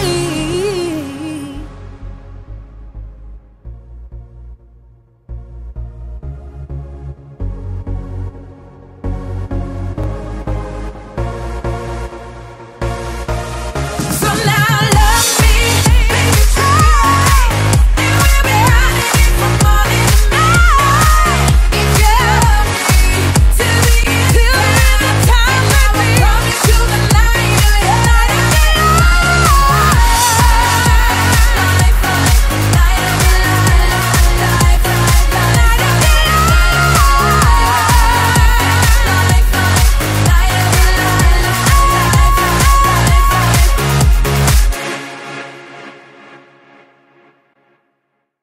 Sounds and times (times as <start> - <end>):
Electronic dance music: 0.0 - 4.6, 5.3 - 47.5.